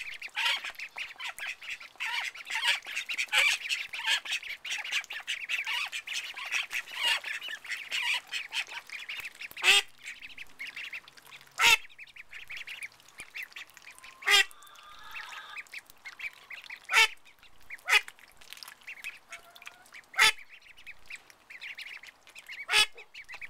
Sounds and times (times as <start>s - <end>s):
Quack: 0.0s - 11.0s, 11.6s - 15.6s, 16.2s - 18.1s, 18.9s - 20.6s, 21.6s - 23.5s.